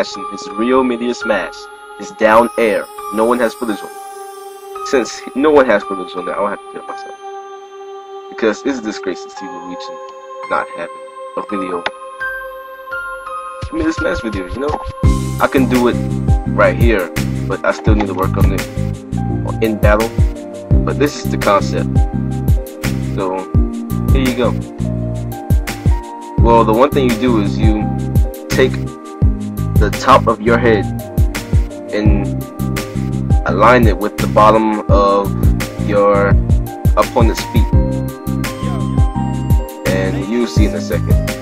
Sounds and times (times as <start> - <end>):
Speech: 0.0 - 3.9, 4.9 - 7.1, 8.4 - 9.9, 10.5 - 11.8, 13.7 - 14.8, 15.4 - 16.0, 16.6 - 18.7, 19.5 - 20.2, 20.9 - 21.9, 23.2 - 23.5, 24.1 - 24.6, 26.4 - 27.9, 28.5 - 28.8, 29.8 - 30.9, 31.9 - 32.3, 33.4 - 36.4, 37.0 - 37.7, 38.6 - 38.9, 39.9 - 41.2
Music: 0.0 - 41.4.